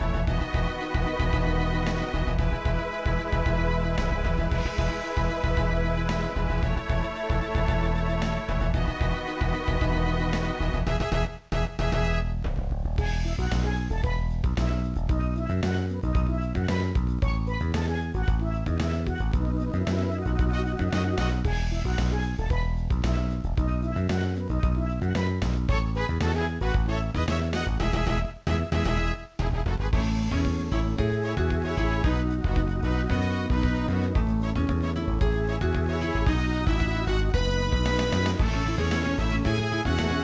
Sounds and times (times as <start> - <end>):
Funny music: 0.0 - 40.2.